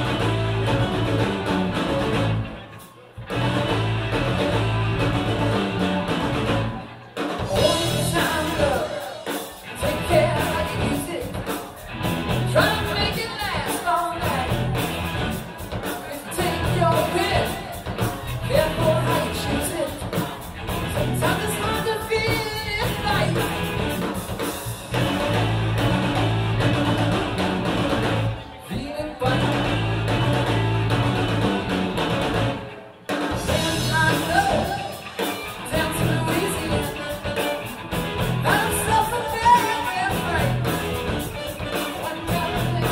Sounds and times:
Independent music: 0.0 - 42.9
Pop music: 7.4 - 15.1, 15.8 - 23.7, 33.4 - 42.9.

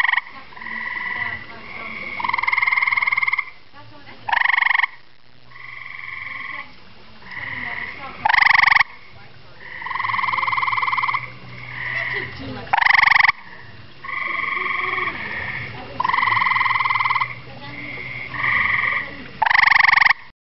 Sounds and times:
Frog: 0.0 - 3.6, 4.3 - 20.3.

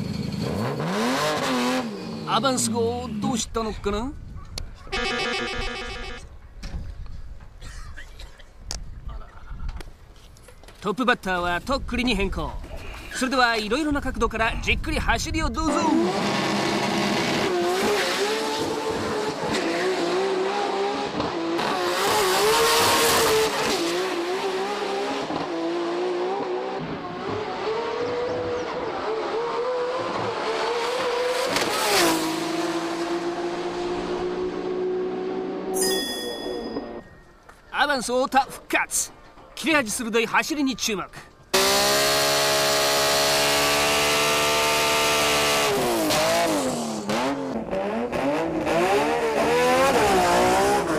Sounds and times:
Race car, auto racing: 0.0 - 3.3, 15.7 - 35.8, 41.5 - 50.9.

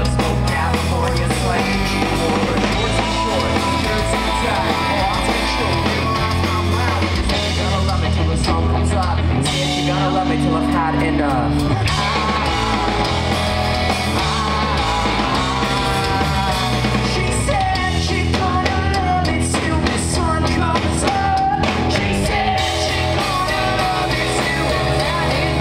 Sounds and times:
Music: 0.0 - 25.6.

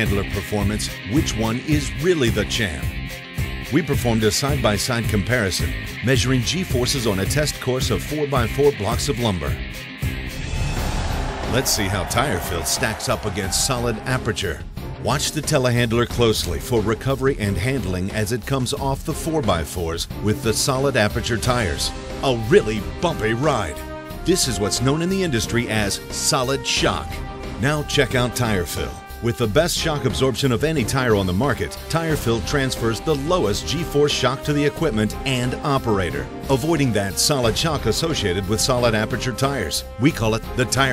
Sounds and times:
Speech: 0.0 - 3.0, 3.7 - 9.7, 11.5 - 40.9
Music: 0.0 - 40.9.

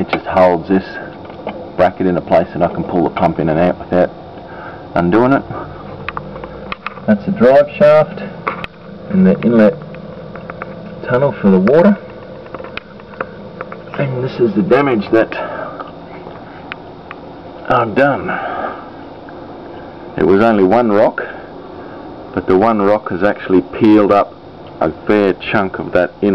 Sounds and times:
Speech: 0.0 - 1.1, 1.8 - 4.1, 5.0 - 5.6, 7.1 - 8.3, 9.1 - 9.8, 11.0 - 12.0, 14.0 - 15.5, 17.6 - 18.4, 20.2 - 21.4, 22.4 - 26.3.

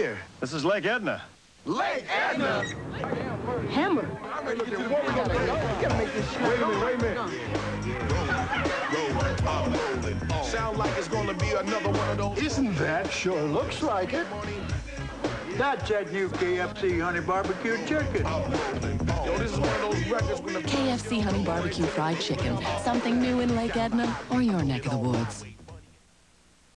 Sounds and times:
Music: 5.0 - 26.0
Speech: 20.7 - 25.5.

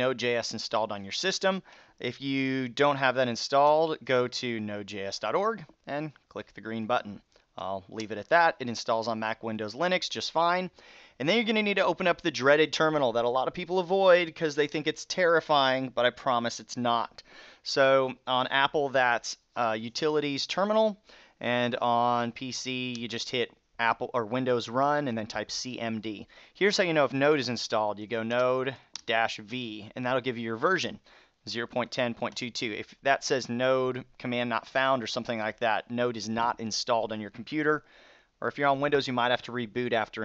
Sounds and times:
Speech: 0.0 - 37.8, 38.4 - 40.2.

